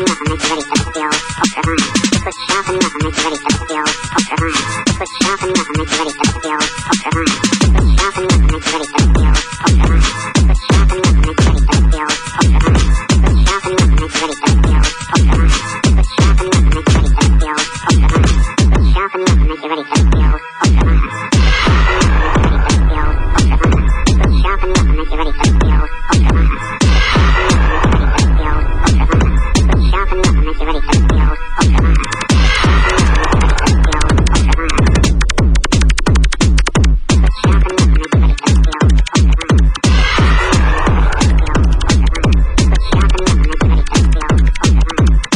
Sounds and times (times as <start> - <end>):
Music: 0.0 - 45.3.